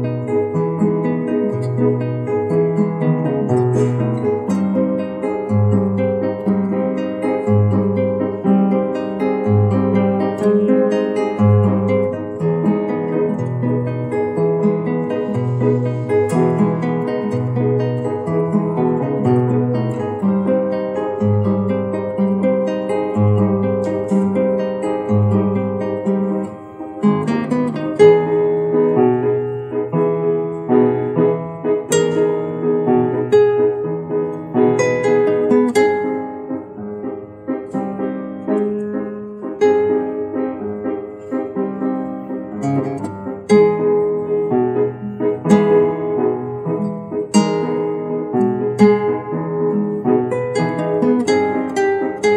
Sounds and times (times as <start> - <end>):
Strum: 0.0 - 52.3.